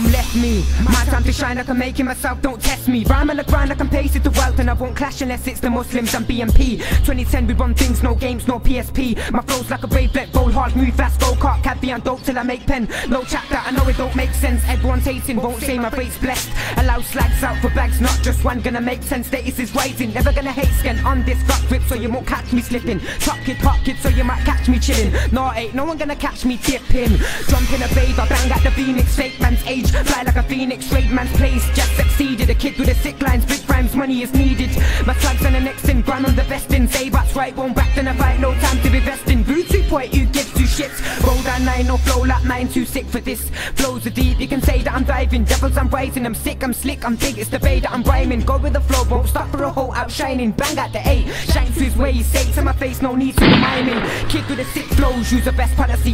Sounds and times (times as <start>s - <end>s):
Music: 0.0s - 56.1s.